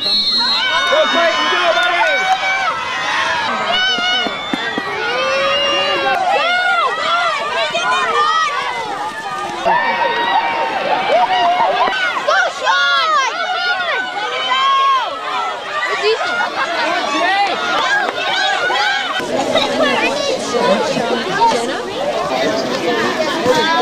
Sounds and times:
Crowd: 0.0s - 23.8s
Outside, rural or natural: 0.0s - 23.8s
Run: 0.0s - 23.8s.

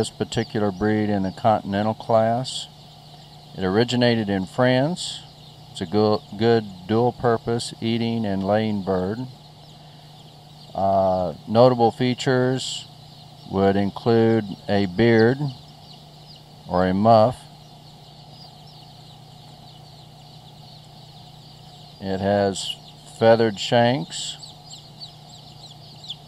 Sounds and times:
Speech: 0.0s - 2.7s, 3.6s - 9.3s, 10.7s - 12.9s, 13.5s - 15.6s, 16.7s - 17.5s, 22.0s - 24.4s.

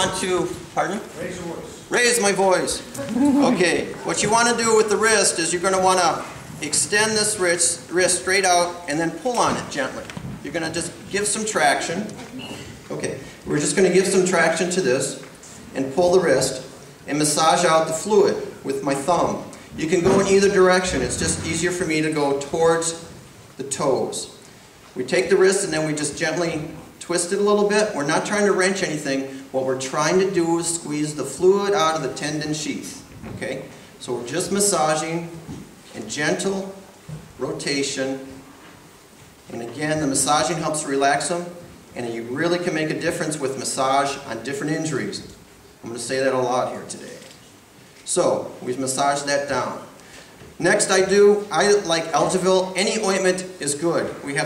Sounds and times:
Speech: 0.0s - 12.3s, 12.9s - 24.4s, 25.0s - 36.8s, 37.4s - 38.4s, 39.5s - 47.4s, 48.0s - 49.9s, 50.6s - 54.4s.

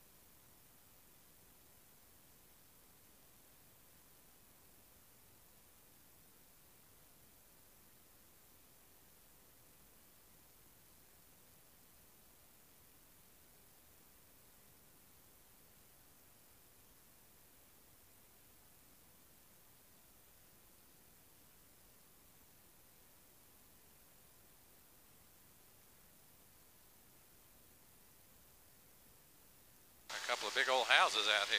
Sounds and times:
Speech: 30.1s - 31.5s.

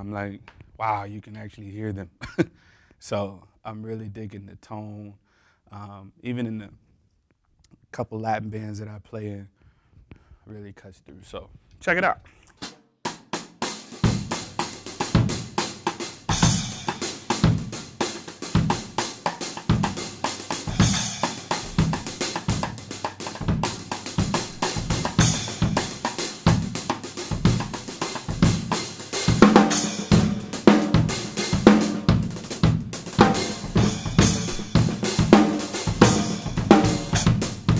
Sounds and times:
Drum kit: 12.6s - 37.7s
Hi-hat: 13.9s - 31.6s, 32.4s - 37.7s
Bass drum: 14.1s - 19.0s, 19.6s - 37.7s
Rimshot: 19.7s - 37.7s.

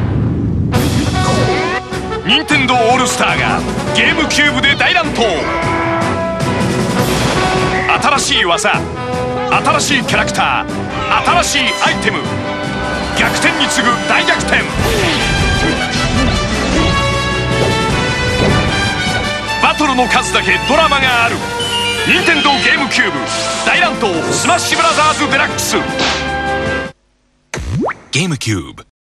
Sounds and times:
Music: 0.6s - 27.0s
Speech: 22.1s - 25.9s, 28.1s - 28.9s.

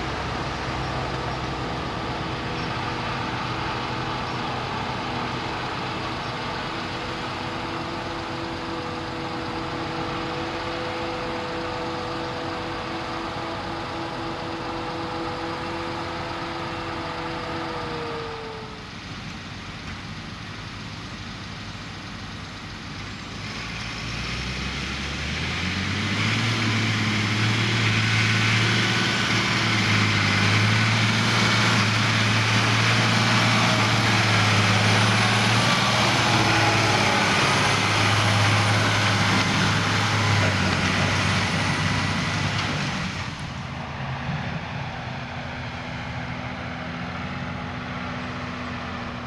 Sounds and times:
Outside, rural or natural: 0.0s - 49.2s
Vehicle: 0.0s - 49.2s.

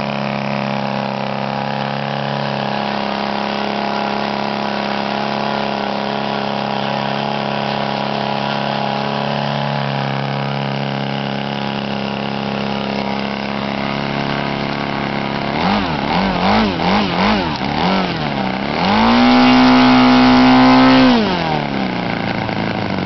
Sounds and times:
Medium engine (mid frequency): 0.0s - 23.0s.

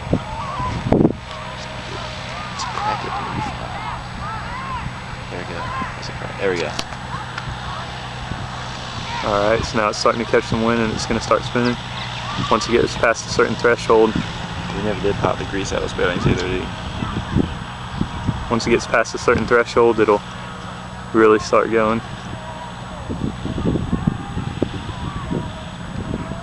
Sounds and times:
Wind noise (microphone): 0.0s - 1.7s, 8.3s - 19.5s, 22.0s - 26.4s.

